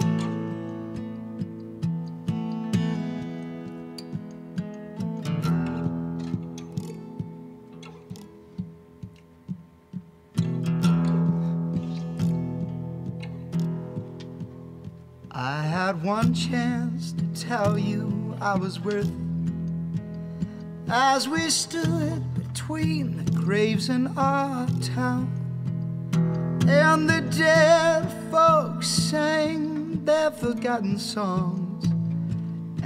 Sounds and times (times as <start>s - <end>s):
Music: 0.0s - 32.8s.